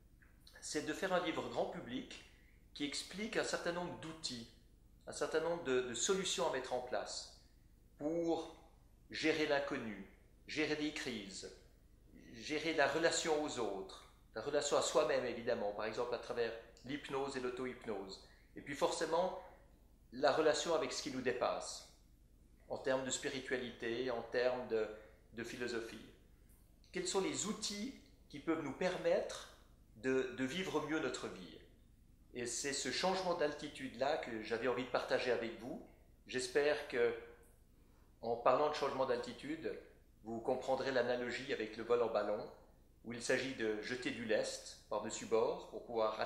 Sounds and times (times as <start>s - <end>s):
Speech: 0.5s - 7.4s, 8.0s - 22.0s, 22.7s - 26.2s, 26.9s - 31.7s, 32.3s - 37.4s, 38.2s - 46.2s.